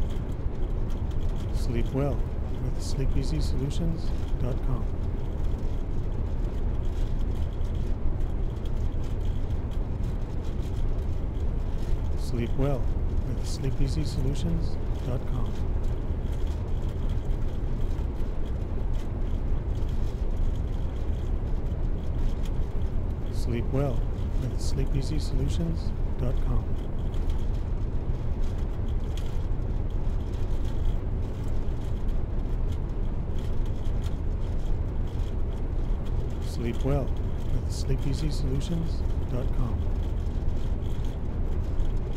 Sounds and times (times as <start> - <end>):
Speech: 1.5 - 4.9, 12.2 - 15.6, 23.3 - 26.7, 36.5 - 39.9.